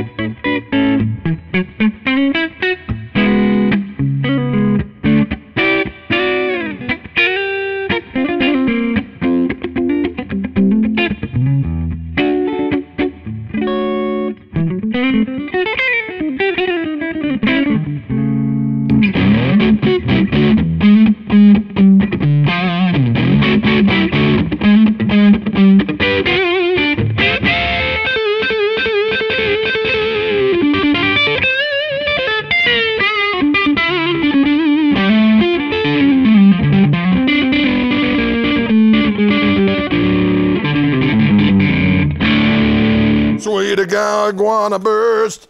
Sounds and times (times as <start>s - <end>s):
Music: 0.0s - 43.9s.